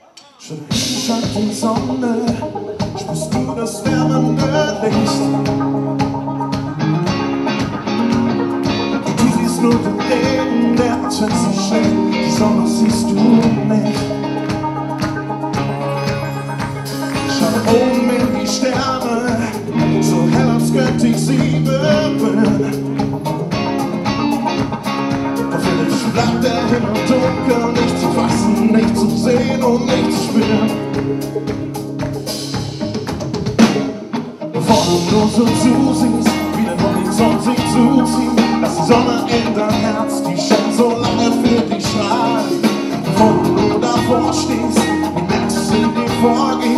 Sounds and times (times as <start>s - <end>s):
Guitar: 0.0s - 46.7s.